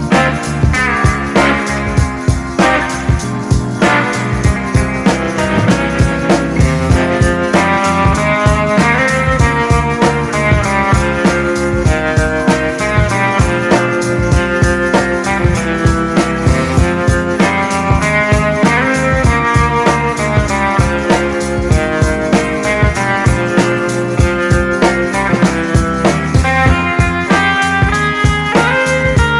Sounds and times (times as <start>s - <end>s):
Music: 0.0s - 29.3s.